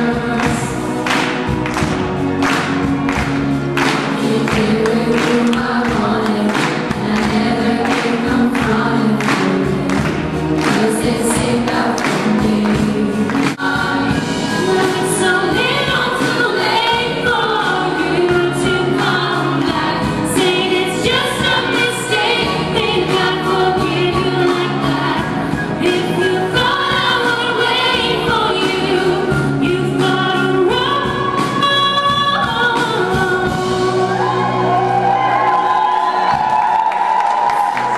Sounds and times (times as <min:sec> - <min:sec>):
Female singing: 0:00.0 - 0:00.8, 0:04.2 - 0:10.0, 0:10.6 - 0:34.3
Music: 0:00.0 - 0:37.9.